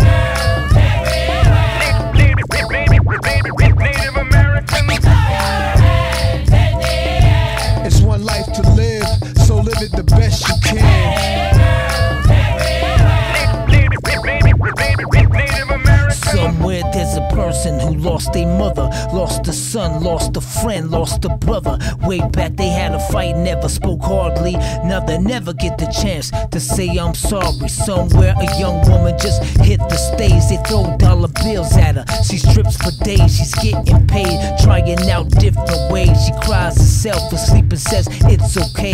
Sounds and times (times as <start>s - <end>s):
Hip hop music: 0.0s - 38.9s.